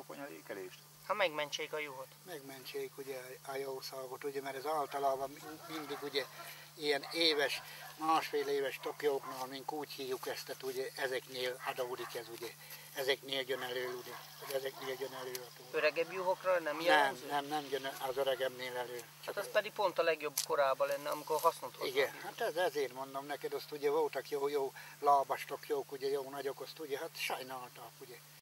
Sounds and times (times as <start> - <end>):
Speech: 0.0 - 28.4.